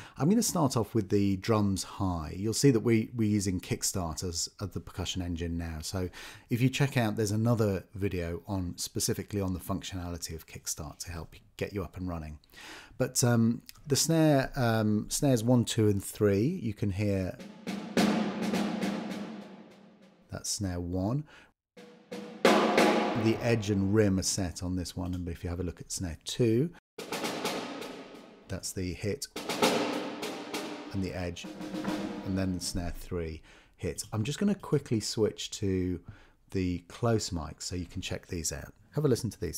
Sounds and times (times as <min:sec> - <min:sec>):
Speech: 0:00.1 - 0:12.4, 0:13.0 - 0:17.4, 0:20.3 - 0:21.3, 0:23.2 - 0:26.8, 0:28.5 - 0:29.4, 0:30.9 - 0:39.5.